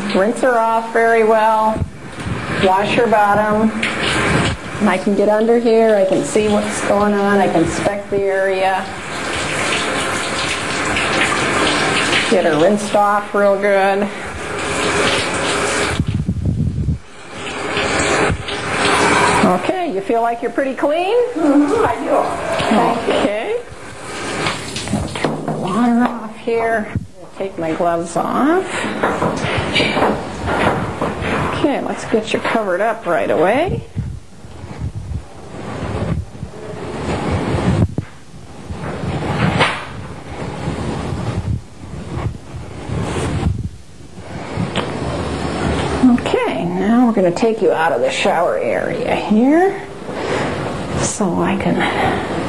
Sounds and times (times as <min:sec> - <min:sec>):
Speech: 0:00.0 - 0:01.8, 0:02.6 - 0:03.8, 0:04.8 - 0:09.0, 0:12.3 - 0:14.2, 0:19.4 - 0:23.7, 0:25.6 - 0:28.7, 0:31.5 - 0:33.9, 0:46.0 - 0:49.9, 0:51.0 - 0:52.1.